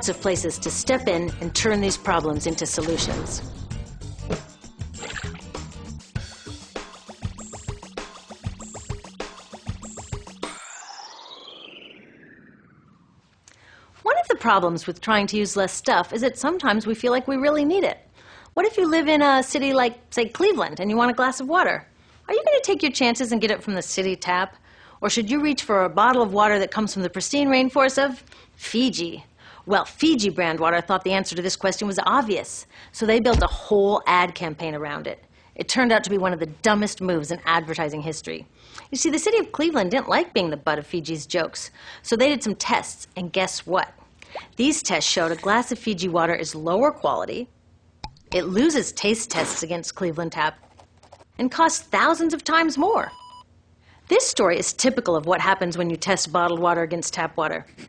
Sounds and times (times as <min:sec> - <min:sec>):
Speech: 0:00.0 - 0:03.4, 0:14.0 - 0:18.0, 0:18.6 - 0:44.0, 0:44.6 - 0:47.5, 0:48.4 - 0:50.6, 0:51.4 - 0:53.1, 0:54.1 - 0:57.7
Music: 0:00.0 - 0:10.7.